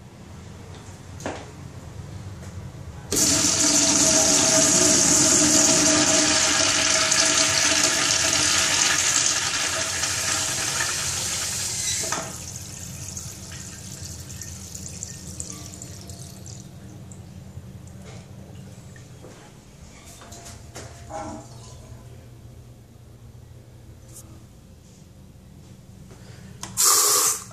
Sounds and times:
Toilet flush: 0:03.1 - 0:16.7.

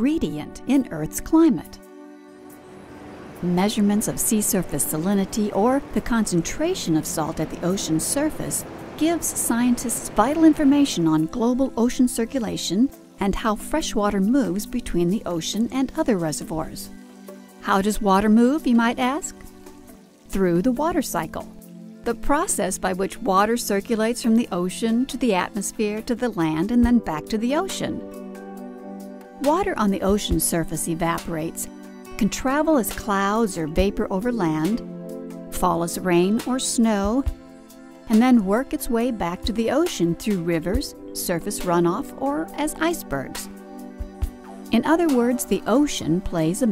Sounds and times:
Speech: 0:00.0 - 0:01.8, 0:03.4 - 0:16.9, 0:17.6 - 0:19.4, 0:20.3 - 0:21.5, 0:22.1 - 0:28.0, 0:29.4 - 0:34.8, 0:35.6 - 0:37.3, 0:38.1 - 0:43.5, 0:44.7 - 0:46.7
Music: 0:00.0 - 0:46.7.

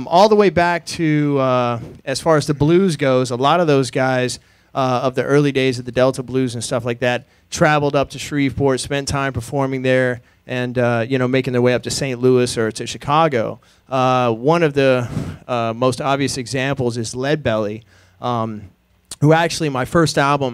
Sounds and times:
Speech: 0:00.0 - 0:20.5.

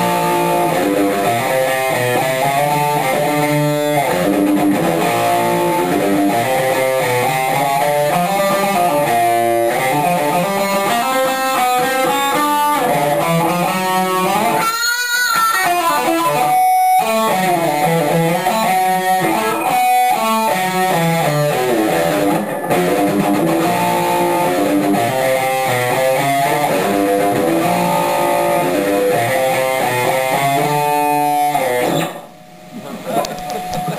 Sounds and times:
Electric guitar: 0:00.0 - 0:33.9.

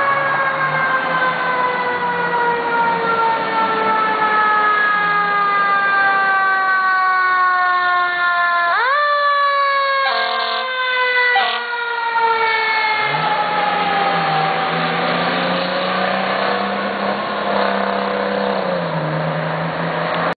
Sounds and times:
Fire engine, fire truck (siren): 0:00.0 - 0:20.3.

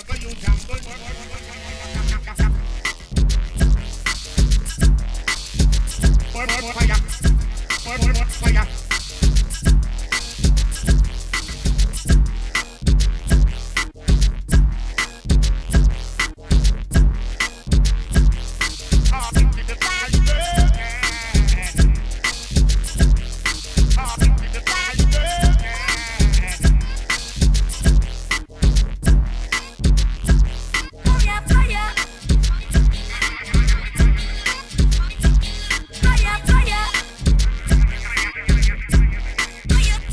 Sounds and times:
Drum machine: 0:00.0 - 0:01.0, 0:01.9 - 0:40.1
Dubstep: 0:00.0 - 0:40.1.

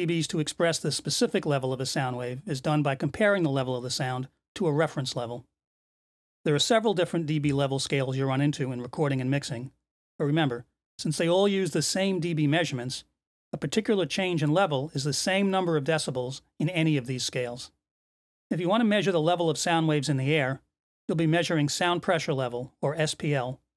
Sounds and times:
Speech: 0:00.0 - 0:05.5, 0:06.5 - 0:17.8, 0:18.5 - 0:23.7.

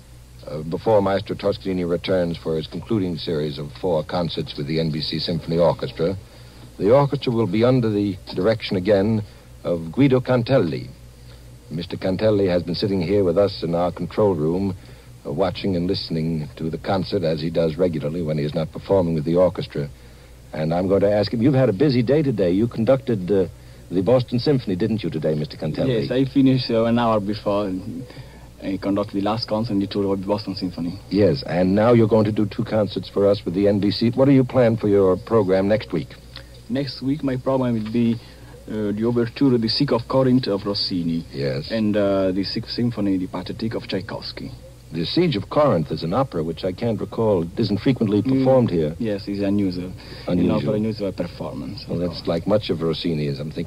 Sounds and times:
Speech: 0:00.4 - 0:06.2, 0:06.8 - 0:11.0, 0:11.7 - 0:19.9, 0:20.5 - 0:53.6
Radio: 0:20.6 - 0:40.6, 0:42.3 - 0:52.6.

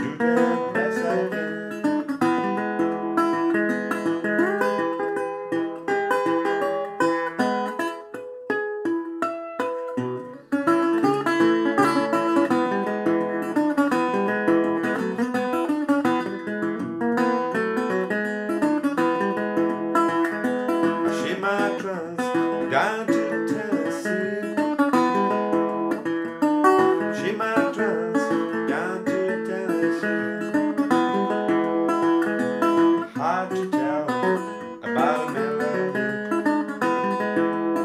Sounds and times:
Music: 0:00.0 - 0:37.8.

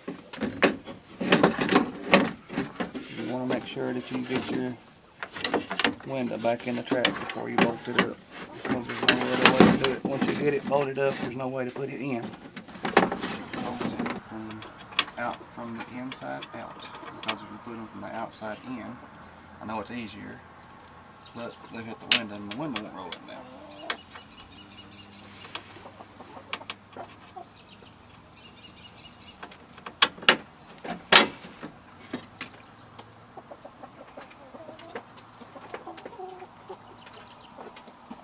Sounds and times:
Speech: 0:03.1 - 0:04.8, 0:06.0 - 0:12.4, 0:13.6 - 0:19.0, 0:19.6 - 0:20.4, 0:21.4 - 0:23.6.

